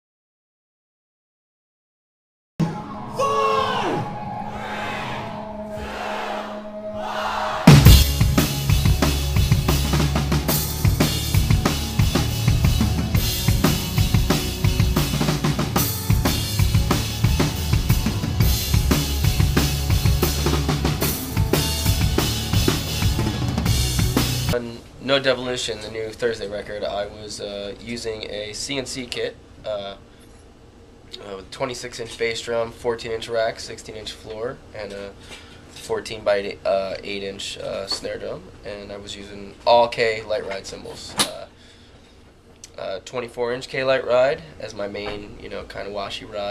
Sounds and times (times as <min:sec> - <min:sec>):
Bass drum: 0:07.7 - 0:24.6.